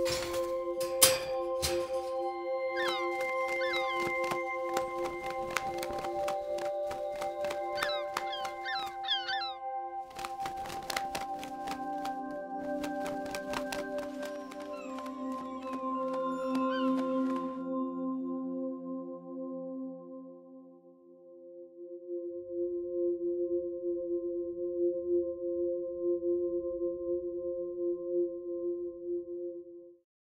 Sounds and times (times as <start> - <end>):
Music: 0.0 - 30.1.